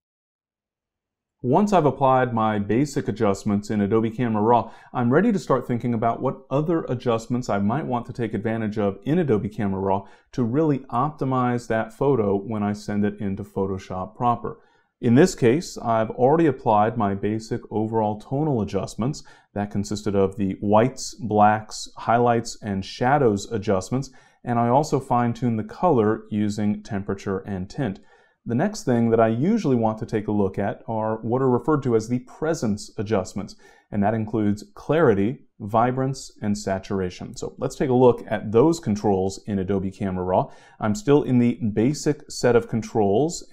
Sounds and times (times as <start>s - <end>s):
Speech: 1.5s - 43.5s.